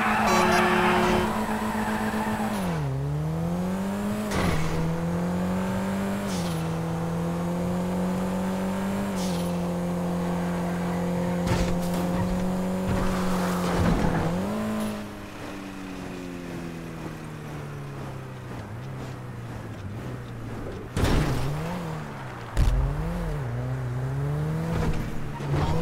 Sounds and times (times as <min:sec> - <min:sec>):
Car passing by: 0:09.1 - 0:25.8.